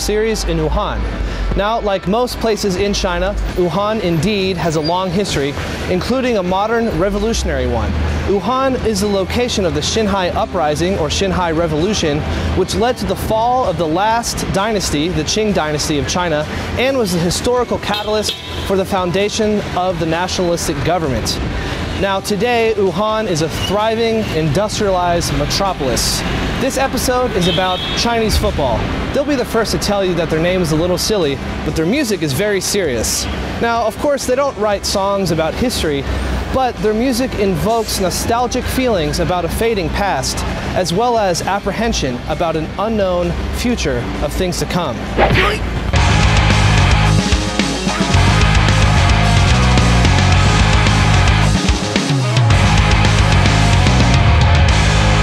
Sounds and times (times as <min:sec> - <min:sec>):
Speech: 0:00.0 - 0:21.4, 0:22.0 - 0:45.6.